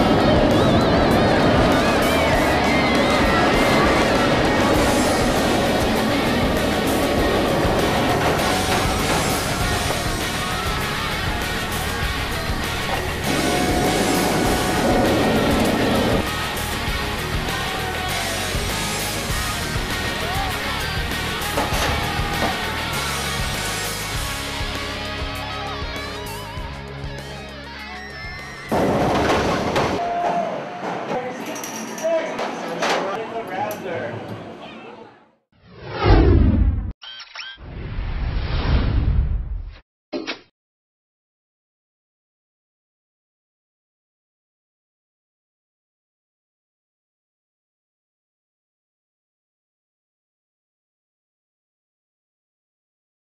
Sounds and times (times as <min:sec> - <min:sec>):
Inside, large room or hall: 0:28.7 - 0:35.2
Speech: 0:31.1 - 0:35.3.